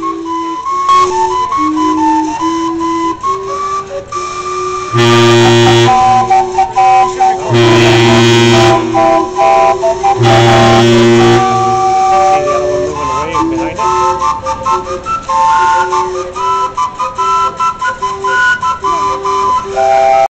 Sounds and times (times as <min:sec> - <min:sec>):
Steam whistle: 0:00.0 - 0:20.3.